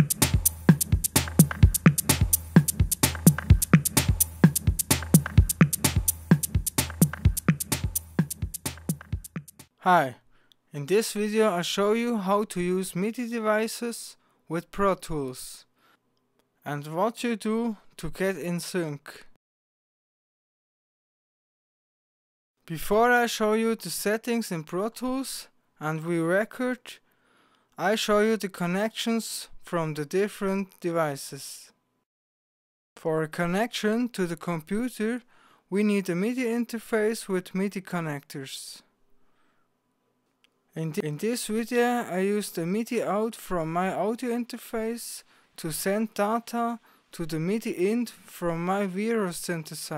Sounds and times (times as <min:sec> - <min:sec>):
Speech: 0:09.8 - 0:15.7, 0:16.6 - 0:19.4, 0:22.6 - 0:27.0, 0:27.8 - 0:31.8, 0:33.0 - 0:38.9, 0:40.8 - 0:49.9.